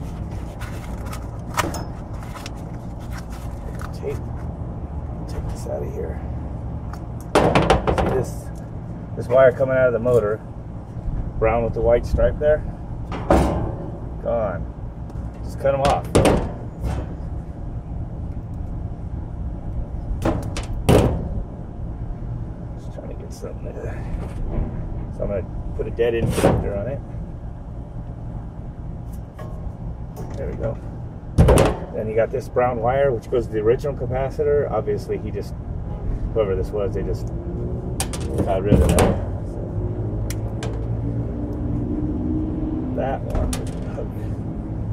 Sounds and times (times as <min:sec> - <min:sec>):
Speech: 0:03.7 - 0:04.2, 0:05.3 - 0:06.2, 0:08.1 - 0:08.6, 0:09.2 - 0:10.4, 0:11.4 - 0:12.7, 0:14.2 - 0:14.7, 0:15.4 - 0:16.2, 0:22.8 - 0:24.0, 0:25.2 - 0:27.0, 0:30.3 - 0:30.8, 0:32.0 - 0:35.6, 0:36.4 - 0:37.3, 0:38.4 - 0:39.2, 0:43.0 - 0:44.3.